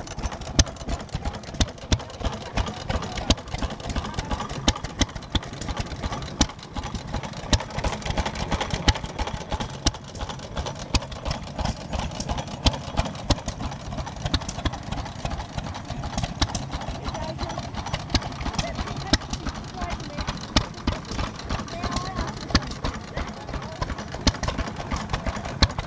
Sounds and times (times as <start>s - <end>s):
Idling: 0.0s - 25.8s
Medium engine (mid frequency): 0.0s - 25.8s
Speech: 2.2s - 4.8s, 16.8s - 17.7s, 18.5s - 24.2s.